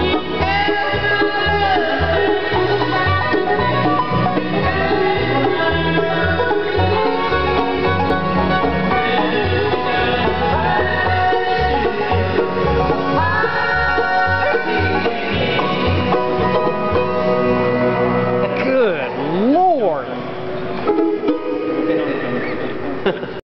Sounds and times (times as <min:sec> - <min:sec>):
Music: 0:00.0 - 0:23.4.